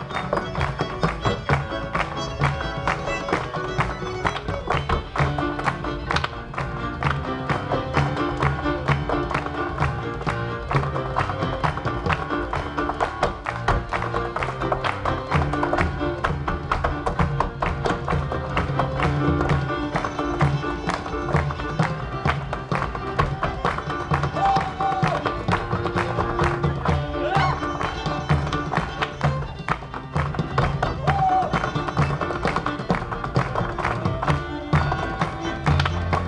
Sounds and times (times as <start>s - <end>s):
Violin, fiddle: 0.0s - 36.2s.